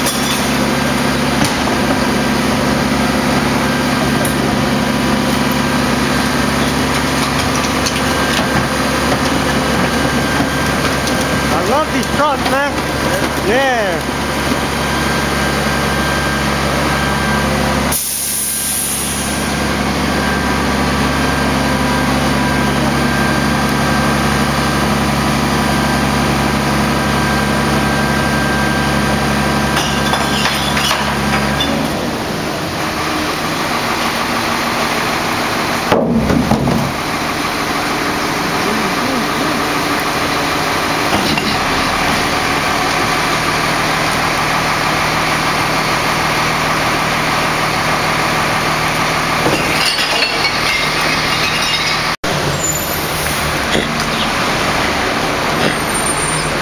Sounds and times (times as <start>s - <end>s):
Truck: 0.0s - 56.6s.